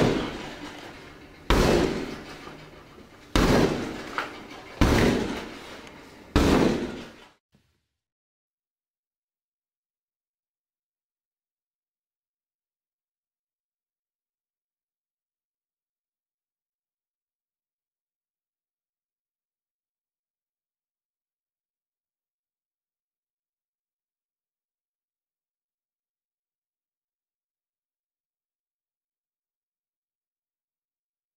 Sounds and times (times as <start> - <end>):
Door: 0.0 - 7.3.